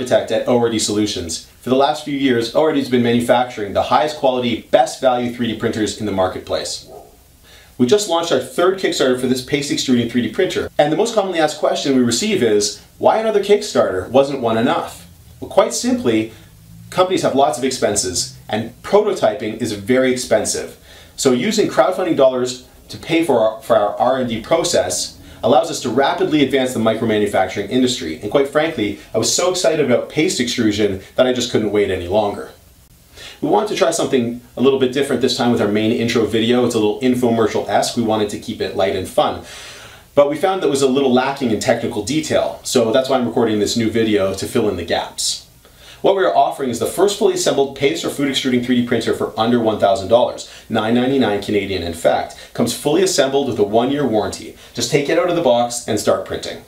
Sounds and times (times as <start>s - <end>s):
Speech: 0.0s - 6.9s, 7.8s - 32.6s, 33.4s - 39.5s, 40.2s - 56.6s.